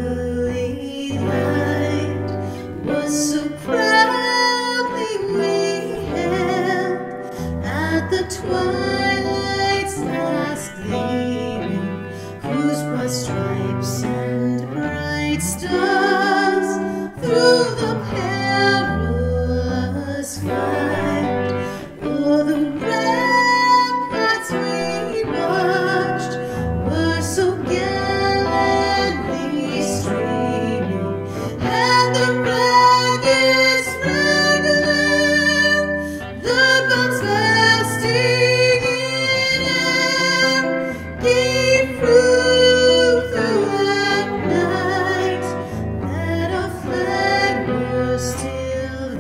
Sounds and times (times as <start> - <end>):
Music: 0.0 - 49.2.